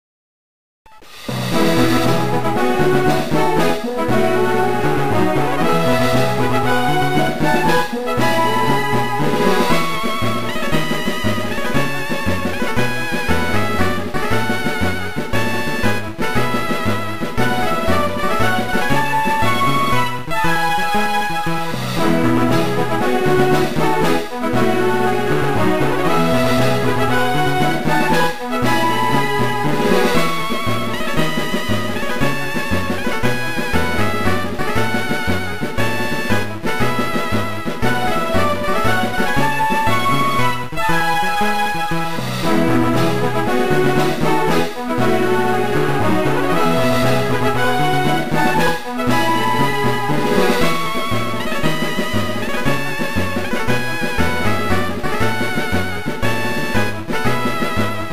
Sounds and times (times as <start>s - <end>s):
Jazz: 1.0s - 58.1s.